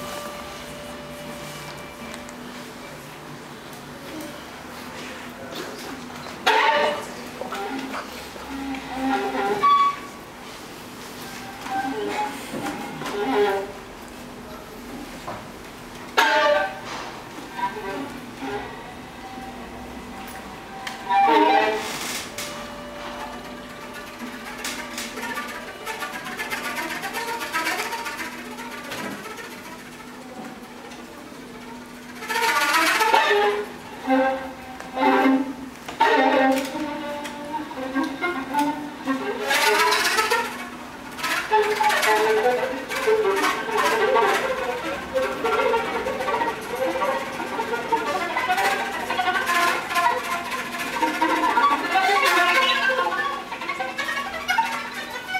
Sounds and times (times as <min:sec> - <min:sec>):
Violin, fiddle: 0:04.0 - 0:10.3, 0:11.1 - 0:14.6, 0:16.0 - 0:55.3.